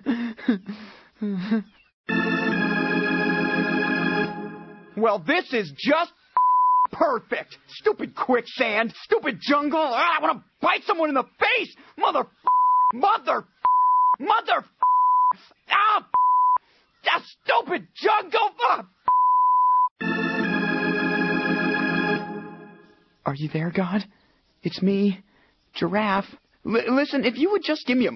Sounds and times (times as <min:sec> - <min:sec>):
Music: 0:02.1 - 0:05.0, 0:20.0 - 0:23.2
Speech: 0:05.0 - 0:06.2, 0:06.9 - 0:12.3, 0:13.0 - 0:13.5, 0:14.2 - 0:14.8, 0:15.7 - 0:16.2, 0:17.0 - 0:18.9, 0:23.2 - 0:28.1.